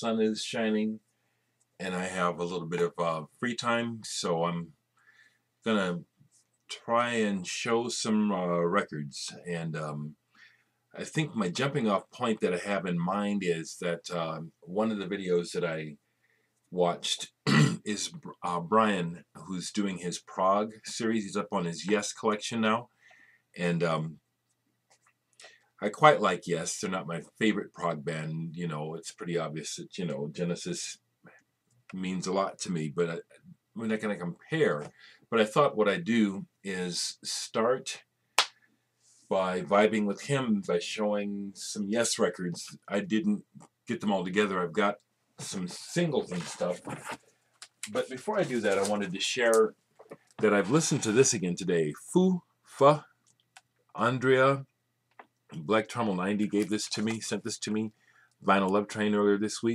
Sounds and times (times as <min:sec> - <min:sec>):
Speech: 0:00.0 - 0:01.0, 0:01.8 - 0:04.8, 0:05.6 - 0:10.2, 0:10.9 - 0:16.0, 0:16.7 - 0:22.9, 0:23.6 - 0:24.2, 0:25.8 - 0:31.0, 0:31.9 - 0:38.1, 0:39.3 - 0:47.2, 0:47.8 - 0:49.8, 0:50.4 - 0:53.2, 0:53.9 - 0:54.7, 0:55.5 - 0:59.7.